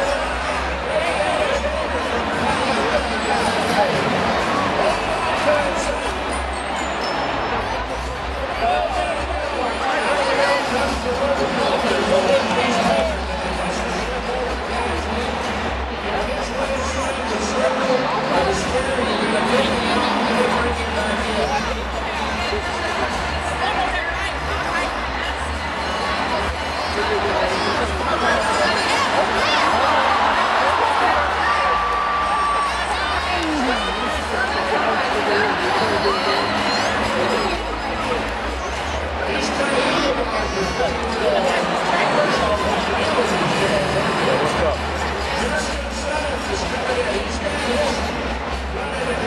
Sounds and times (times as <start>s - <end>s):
Music: 0.0s - 49.2s
Speech: 0.0s - 49.2s.